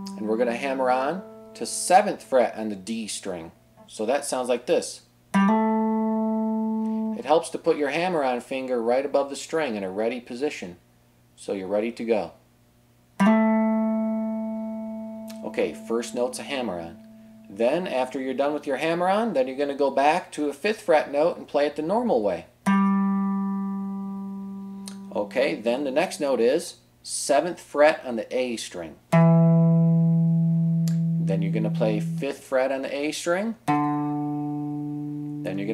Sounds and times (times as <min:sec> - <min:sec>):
Strum: 0:00.0 - 0:03.9, 0:13.2 - 0:18.0, 0:22.7 - 0:25.7, 0:29.1 - 0:32.5, 0:33.7 - 0:35.7
Speech: 0:00.2 - 0:05.1, 0:07.2 - 0:10.8, 0:11.4 - 0:12.4, 0:15.3 - 0:22.5, 0:25.1 - 0:29.0, 0:31.3 - 0:33.6, 0:35.5 - 0:35.7.